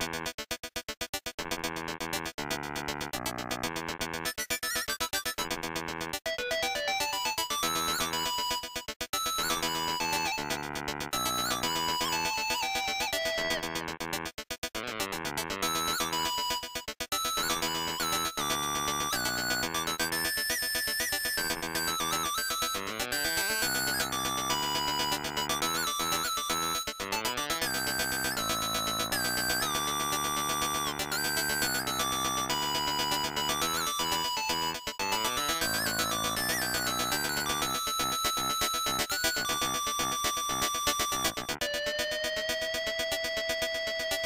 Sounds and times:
Video game music: 0:00.0 - 0:44.2.

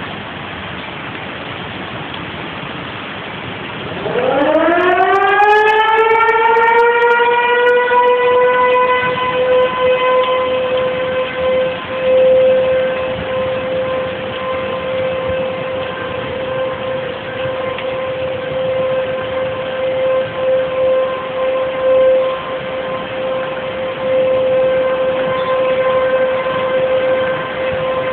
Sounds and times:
Vehicle: 0:00.0 - 0:28.1
Siren: 0:03.7 - 0:28.1.

